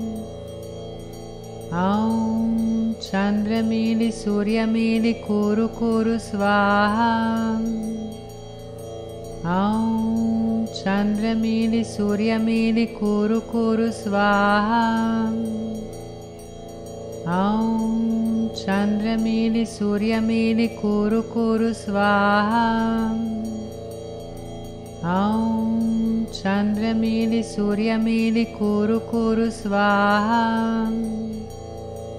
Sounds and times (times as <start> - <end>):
Mantra: 1.7 - 8.2, 9.4 - 15.8, 17.3 - 23.6, 25.0 - 31.5.